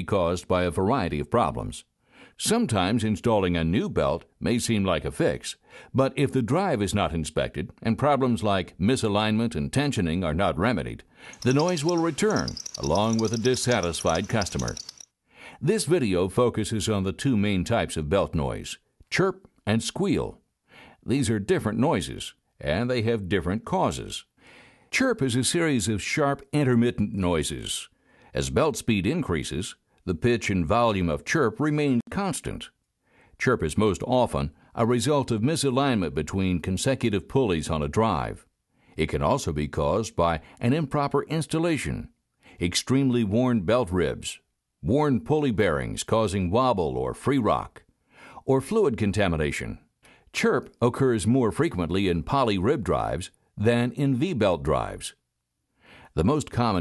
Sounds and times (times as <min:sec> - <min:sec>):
Speech: 0:00.0 - 0:14.8, 0:15.6 - 0:20.4, 0:21.0 - 0:24.3, 0:25.0 - 0:32.8, 0:33.4 - 0:47.8, 0:48.4 - 0:55.2, 0:56.1 - 0:56.8.